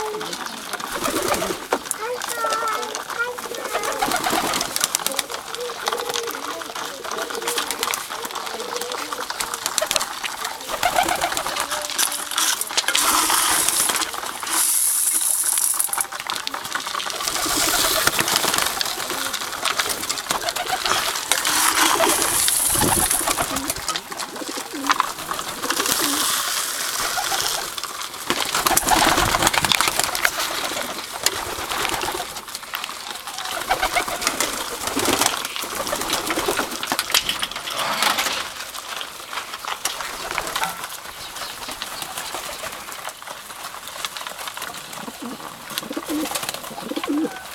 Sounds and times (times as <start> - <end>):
Coo: 0.0 - 14.2, 15.6 - 27.8, 28.5 - 37.0, 44.2 - 47.5.